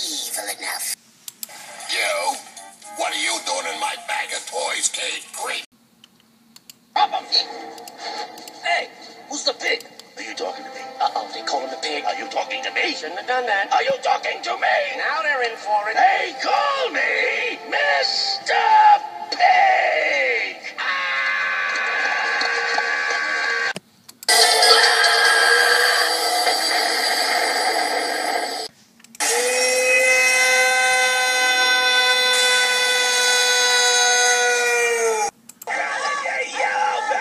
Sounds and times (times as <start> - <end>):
Speech: 3.0 - 5.7, 8.6 - 20.6.